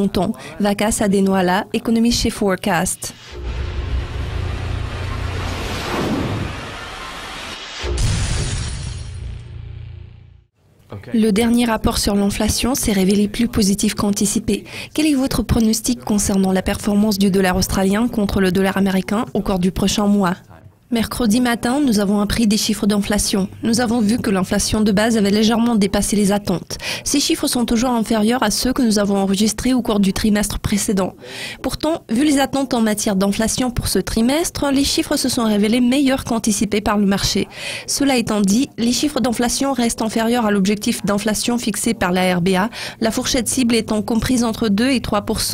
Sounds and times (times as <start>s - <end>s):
Speech: 0.0s - 3.1s, 10.9s - 45.5s.